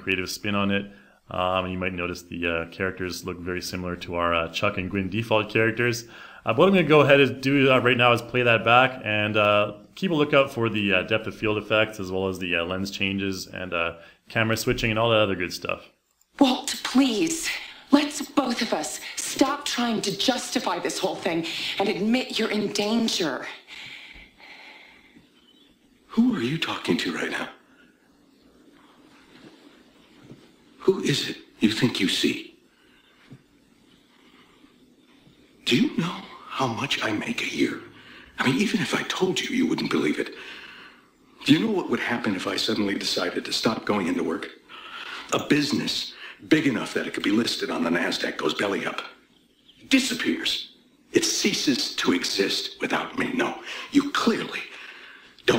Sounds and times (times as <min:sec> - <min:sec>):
Speech: 0:00.0 - 0:23.6, 0:26.1 - 0:27.6, 0:30.8 - 0:32.6, 0:35.6 - 0:40.4, 0:41.4 - 0:44.6, 0:45.3 - 0:49.2, 0:49.8 - 0:54.7.